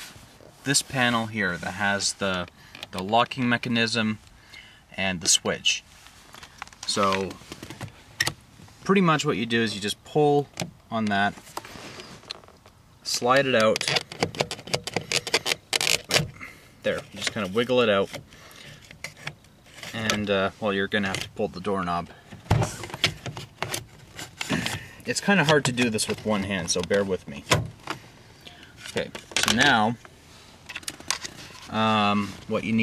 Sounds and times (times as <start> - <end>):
Speech: 0.6 - 4.2, 5.0 - 5.8, 6.9 - 7.4, 8.8 - 11.4, 13.0 - 14.0, 16.8 - 18.2, 19.9 - 22.2, 25.0 - 27.5, 28.9 - 30.0, 31.7 - 32.8.